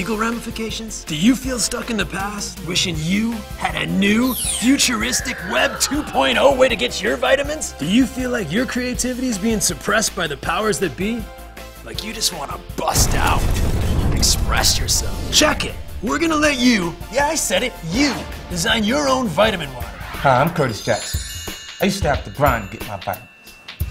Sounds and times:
Speech: 0.0s - 21.1s, 21.8s - 23.3s
Music: 0.0s - 23.9s.

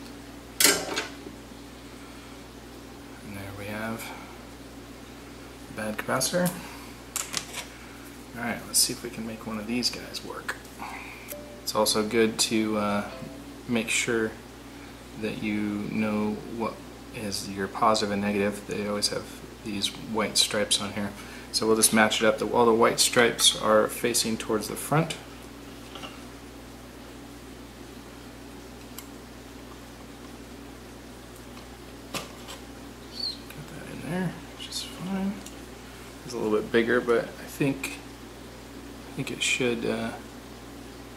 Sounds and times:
Inside, small room: 0.0s - 41.1s
Speech: 3.2s - 4.3s, 5.7s - 6.7s, 8.4s - 10.6s, 11.7s - 14.4s, 15.2s - 25.2s, 33.5s - 35.5s, 36.2s - 38.1s, 39.1s - 40.3s.

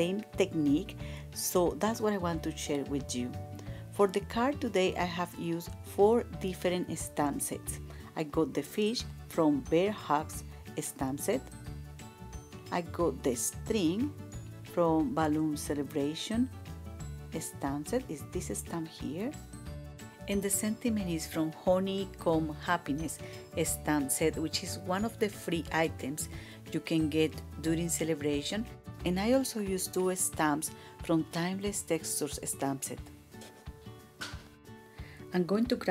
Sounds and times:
Speech: 0.0s - 3.4s, 4.0s - 11.5s, 12.7s - 14.1s, 14.7s - 16.5s, 17.4s - 19.4s, 20.3s - 33.0s, 35.3s - 35.9s
Music: 0.0s - 35.9s.

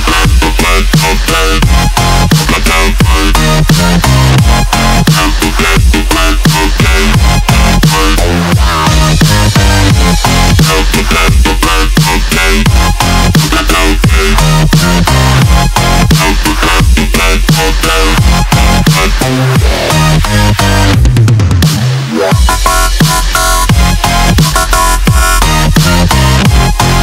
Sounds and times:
Dubstep: 0.0s - 27.0s.

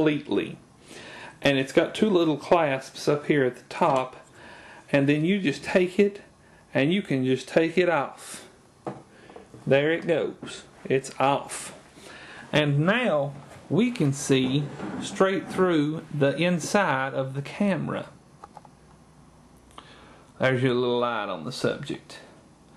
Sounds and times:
Speech: 0.0s - 0.6s, 1.4s - 4.2s, 4.9s - 8.6s, 9.6s - 11.8s, 12.5s - 18.2s, 20.4s - 22.4s.

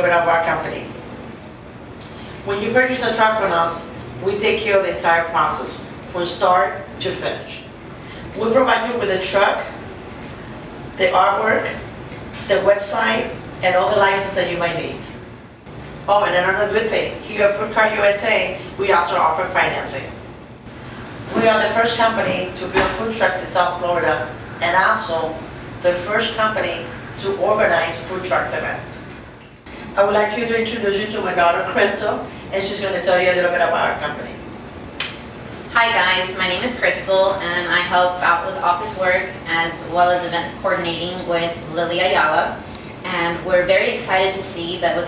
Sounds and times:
Speech: 0.0s - 1.0s, 2.4s - 7.7s, 8.4s - 9.8s, 11.0s - 15.2s, 16.1s - 20.2s, 21.3s - 29.1s, 30.0s - 34.4s, 35.7s - 45.0s.

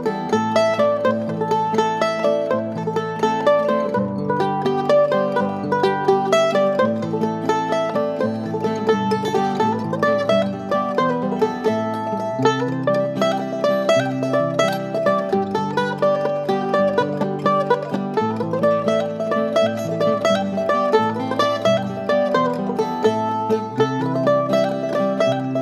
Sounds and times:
Mandolin: 0.0s - 25.6s.

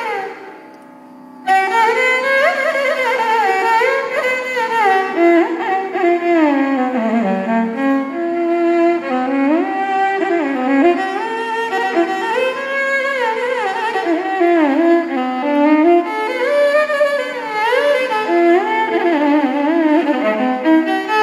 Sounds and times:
Violin, fiddle: 8.6s - 21.2s.

